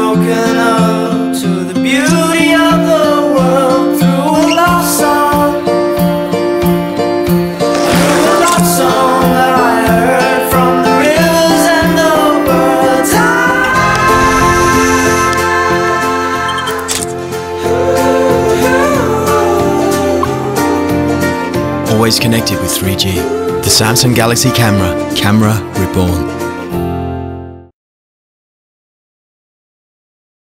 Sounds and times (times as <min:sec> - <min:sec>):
Music: 0:00.0 - 0:27.8
Speech: 0:21.9 - 0:26.3.